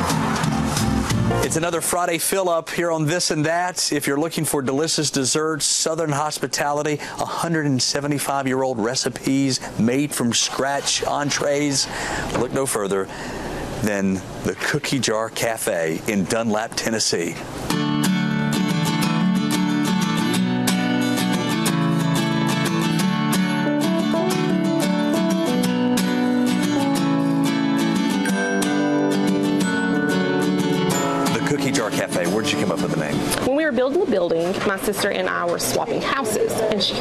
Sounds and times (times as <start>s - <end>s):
Music: 0.0s - 1.8s, 17.7s - 33.4s.